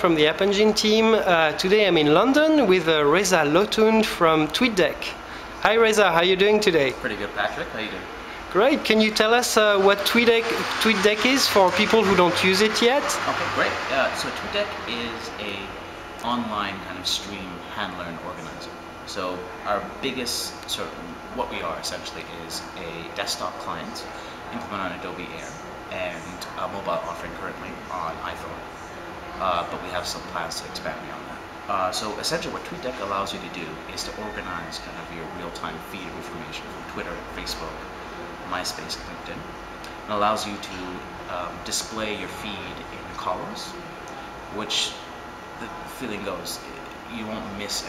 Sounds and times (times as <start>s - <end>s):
Speech: 0.0s - 28.7s, 29.4s - 43.8s, 44.5s - 47.8s.